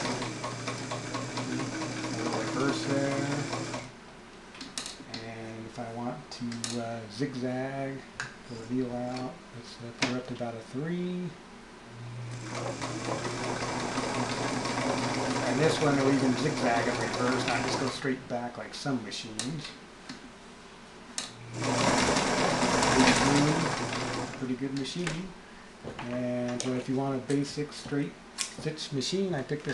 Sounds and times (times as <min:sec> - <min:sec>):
Sewing machine: 0:00.0 - 0:03.9, 0:12.3 - 0:18.0, 0:21.5 - 0:24.4
Speech: 0:02.2 - 0:03.6, 0:05.1 - 0:11.4, 0:15.4 - 0:19.8, 0:23.0 - 0:23.8, 0:24.4 - 0:25.4, 0:26.0 - 0:29.7.